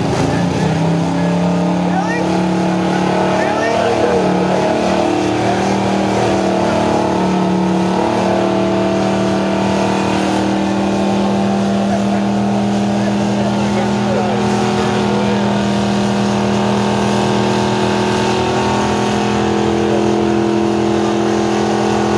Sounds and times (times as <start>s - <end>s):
Car: 0.0s - 22.1s
Truck: 0.0s - 22.1s.